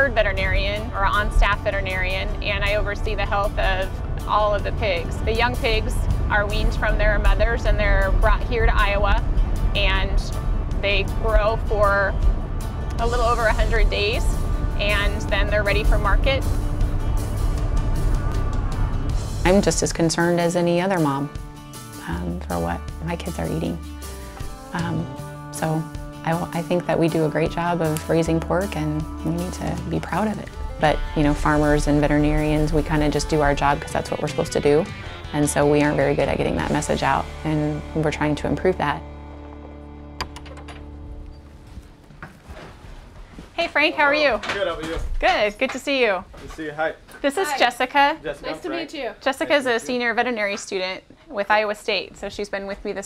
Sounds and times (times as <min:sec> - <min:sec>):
Music: 0:00.0 - 0:42.4, 0:46.6 - 0:50.7
Speech: 0:24.8 - 0:34.8.